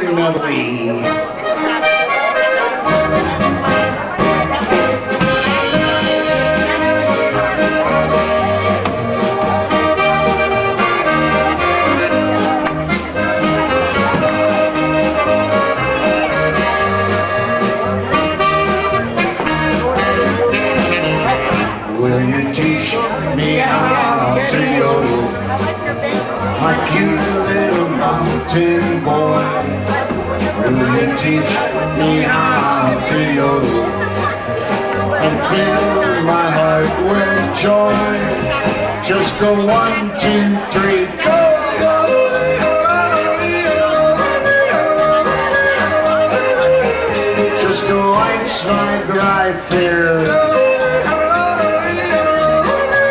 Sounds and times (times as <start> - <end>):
Music: 0.0 - 53.1
Speech: 0.0 - 53.1.